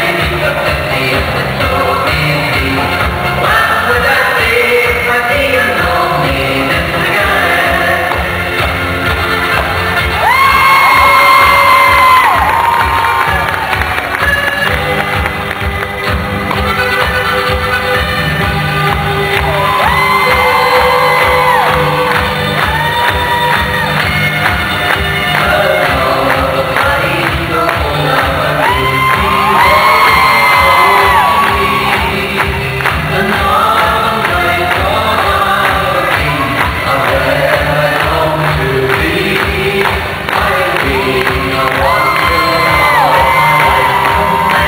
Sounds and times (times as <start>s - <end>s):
Inside, public space: 0.0s - 44.6s
Music: 0.0s - 44.6s.